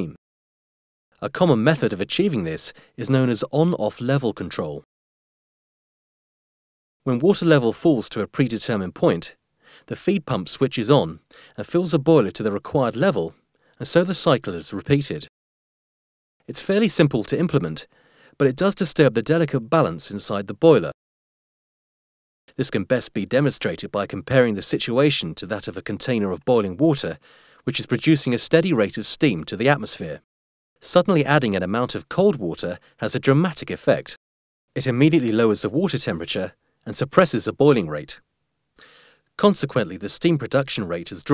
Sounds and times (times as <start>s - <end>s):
Speech: 0.0s - 0.2s, 1.2s - 4.9s, 7.0s - 15.3s, 16.4s - 21.0s, 22.5s - 34.2s, 34.8s - 38.2s, 39.4s - 41.3s.